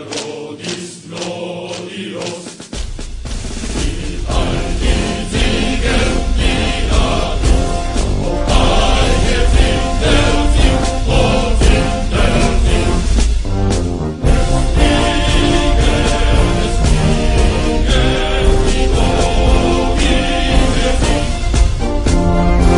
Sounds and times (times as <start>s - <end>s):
Music: 0.0s - 22.7s.